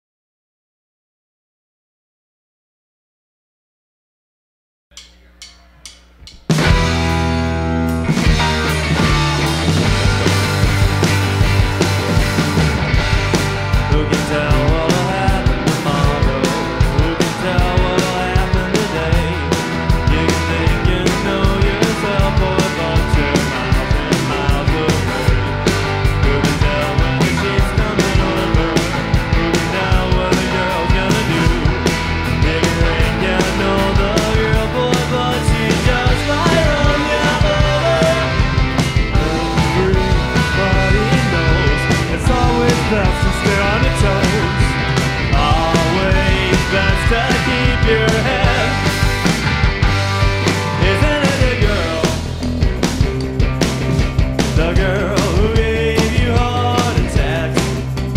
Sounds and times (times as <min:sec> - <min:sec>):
Music: 0:04.9 - 0:58.1.